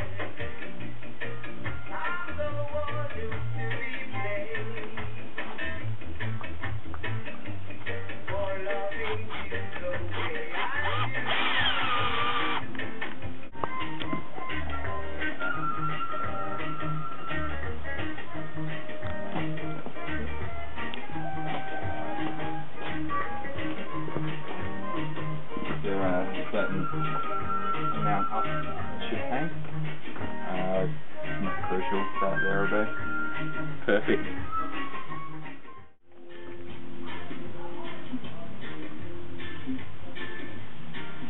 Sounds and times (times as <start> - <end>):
Music: 0.0 - 41.3
Speech: 25.8 - 26.9, 30.5 - 32.9, 33.9 - 34.4.